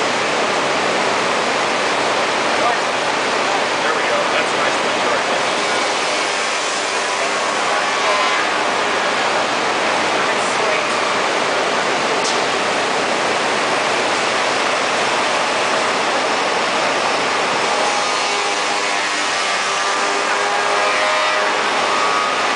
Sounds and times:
Speech: 0:02.6 - 0:02.9, 0:03.8 - 0:05.5, 0:10.2 - 0:11.0.

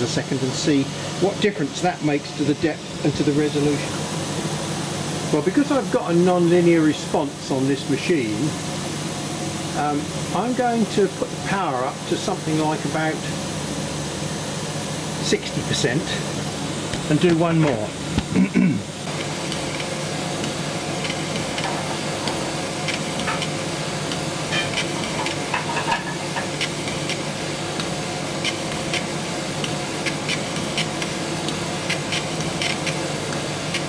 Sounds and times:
Speech: 0:00.0 - 0:04.0, 0:05.3 - 0:08.6, 0:09.8 - 0:13.4, 0:15.2 - 0:16.3, 0:17.1 - 0:18.0.

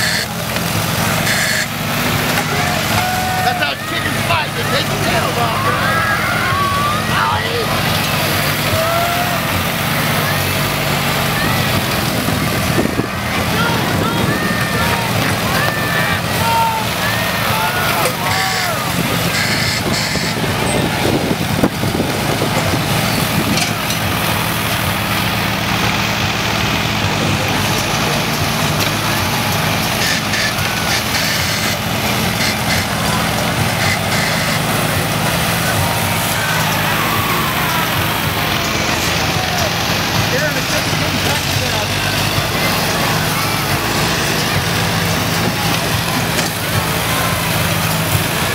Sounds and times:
Speech: 0:02.0 - 0:21.5, 0:26.8 - 0:48.5.

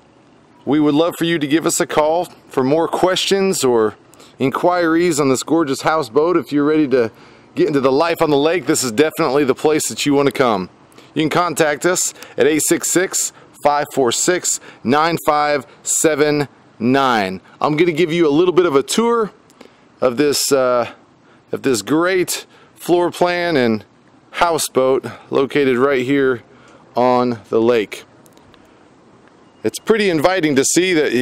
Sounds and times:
Speech: 0:00.7 - 0:19.4, 0:20.0 - 0:26.4, 0:27.0 - 0:28.1, 0:29.6 - 0:31.2.

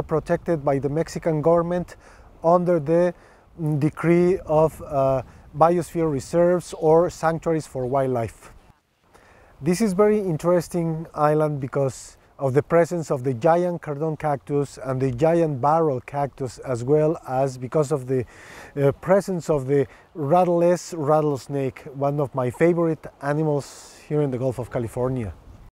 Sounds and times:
Speech: 0:00.0 - 0:08.5, 0:09.6 - 0:18.2, 0:18.8 - 0:25.4.

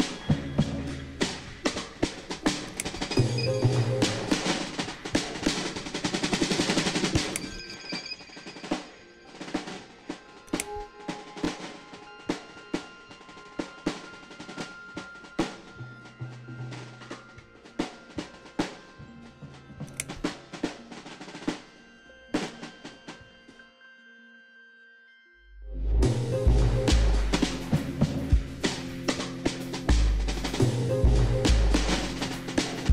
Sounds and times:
Drum roll: 0:00.0 - 0:07.6, 0:26.0 - 0:32.9.

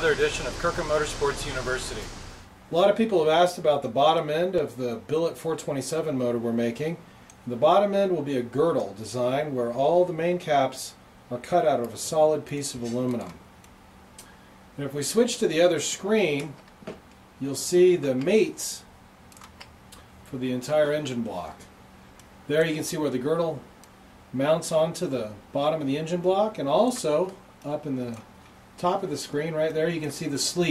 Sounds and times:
Speech: 0:00.0 - 0:13.4, 0:14.8 - 0:16.6, 0:17.4 - 0:18.9, 0:20.3 - 0:21.7, 0:22.5 - 0:23.7, 0:24.4 - 0:30.7.

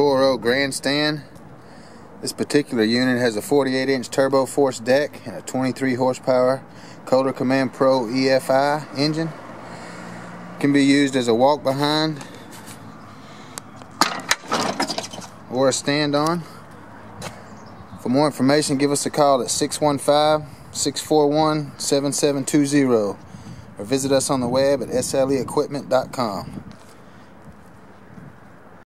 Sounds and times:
Speech: 0:00.0 - 0:01.3, 0:02.2 - 0:09.4, 0:10.6 - 0:12.2, 0:15.5 - 0:16.5, 0:18.0 - 0:23.2, 0:23.8 - 0:26.6.

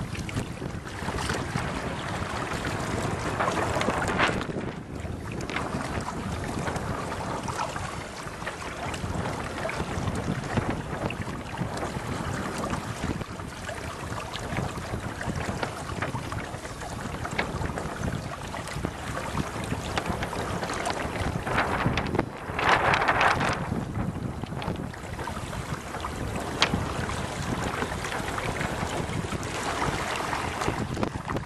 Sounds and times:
Rowboat, canoe, kayak: 0:00.0 - 0:31.4
Wind: 0:00.0 - 0:31.4.

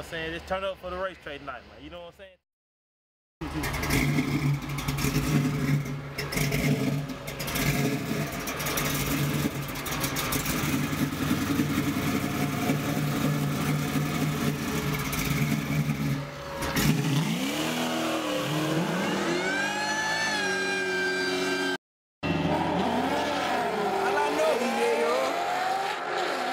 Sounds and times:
Outside, urban or manmade: 0:00.0 - 0:02.5, 0:03.4 - 0:26.5
Car: 0:03.4 - 0:26.5.

